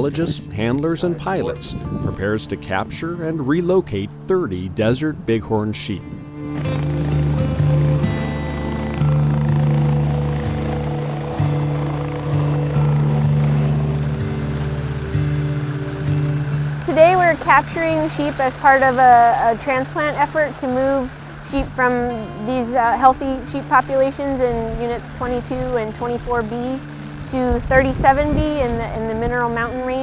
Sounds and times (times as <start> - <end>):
Speech: 0.0 - 6.1, 16.8 - 30.0
Music: 0.0 - 30.0.